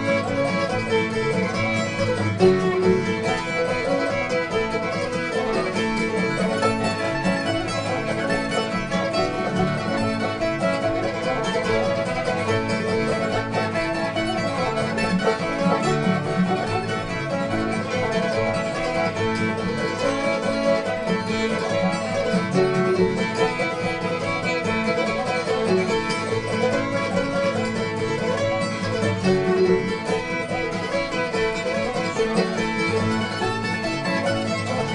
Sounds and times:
Violin, fiddle: 0.0s - 34.9s.

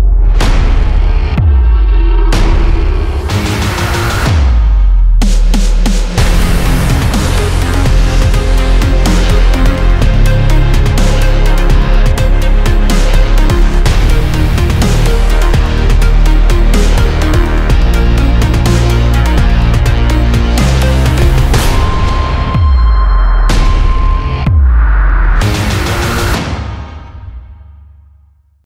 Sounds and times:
Music: 0.0s - 28.6s.

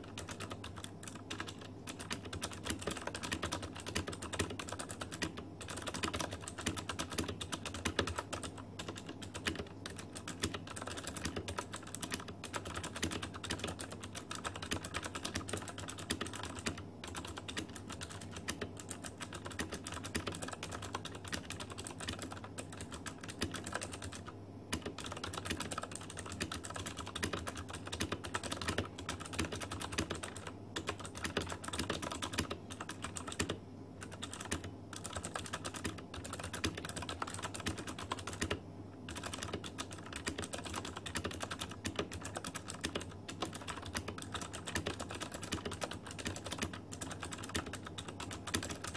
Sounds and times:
Typing: 0.0s - 48.9s.

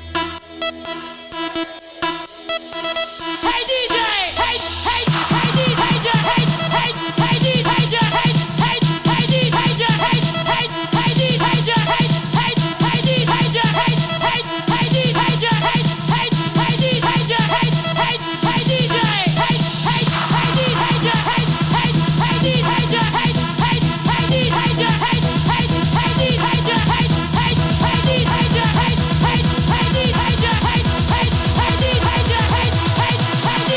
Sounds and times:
Disco: 0.0s - 33.7s
House music: 0.0s - 33.7s.

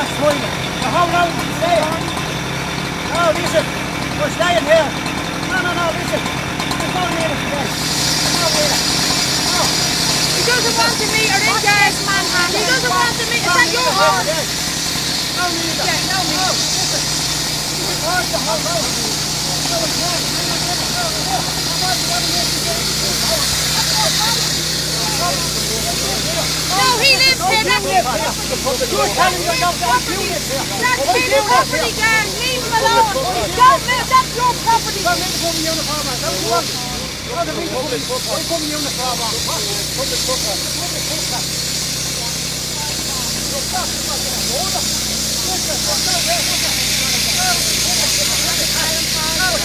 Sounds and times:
Speech: 17.8s - 41.5s, 42.1s - 49.6s.

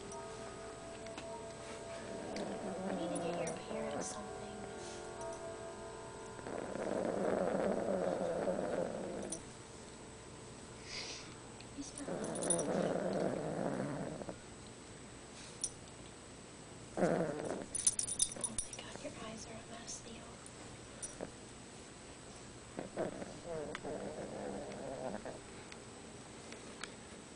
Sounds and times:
Music: 0.0s - 7.7s
Speech: 3.0s - 4.6s, 11.8s - 12.1s, 18.7s - 20.4s
Snoring: 6.4s - 9.4s, 12.0s - 14.4s, 17.0s - 17.6s, 22.8s - 25.4s.

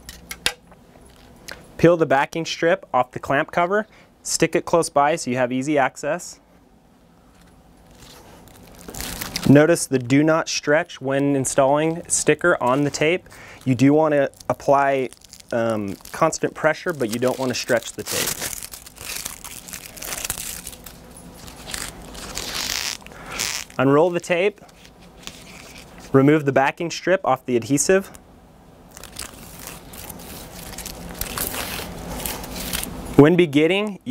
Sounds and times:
Speech: 1.8s - 6.4s, 9.4s - 18.4s, 23.8s - 24.6s, 26.1s - 28.2s, 33.2s - 34.1s.

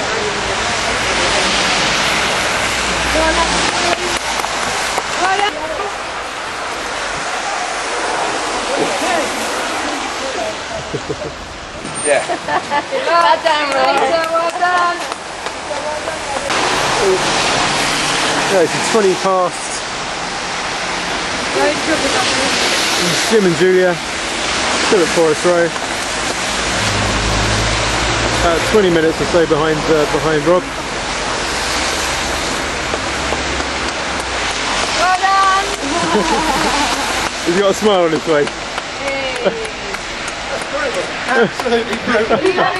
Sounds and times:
Rain: 0.0s - 42.7s.

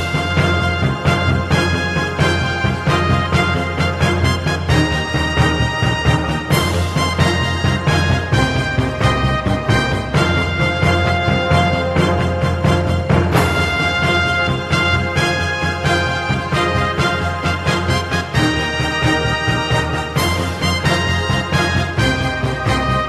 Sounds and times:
Theme music: 0.0s - 23.0s.

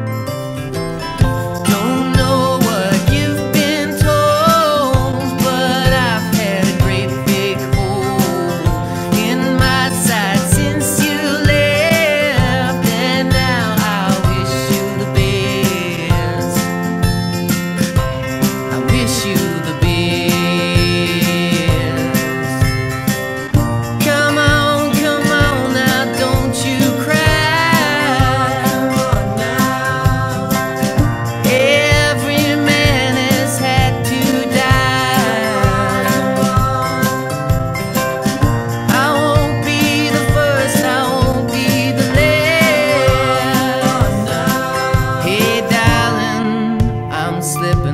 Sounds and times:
Music: 0.0s - 47.9s.

